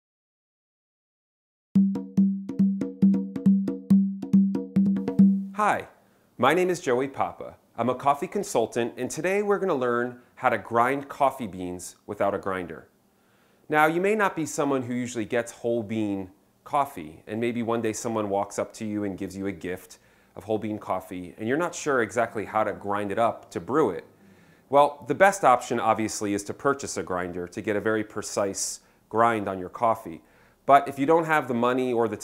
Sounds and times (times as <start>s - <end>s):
Music: 1.8s - 5.6s
Speech: 5.6s - 12.9s, 13.7s - 24.1s, 24.7s - 32.2s.